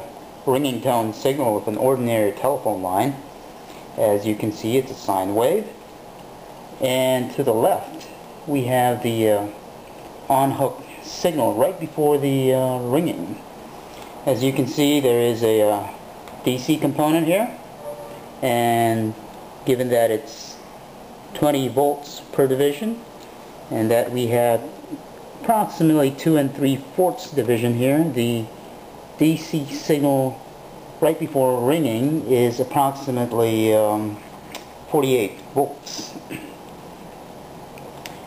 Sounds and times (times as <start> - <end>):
Speech: 0.0 - 3.3, 4.0 - 5.8, 6.8 - 9.6, 10.3 - 13.5, 14.2 - 17.6, 18.4 - 20.7, 21.4 - 23.1, 23.7 - 28.6, 29.2 - 34.3, 34.9 - 36.5.